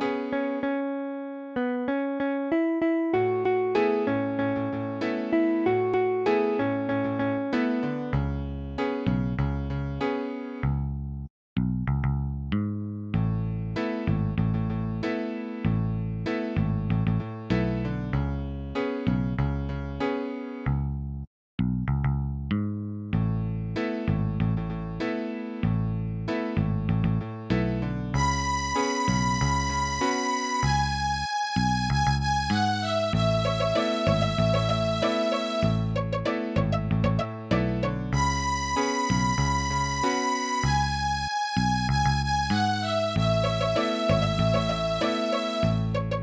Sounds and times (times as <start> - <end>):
Music: 0.0 - 46.2.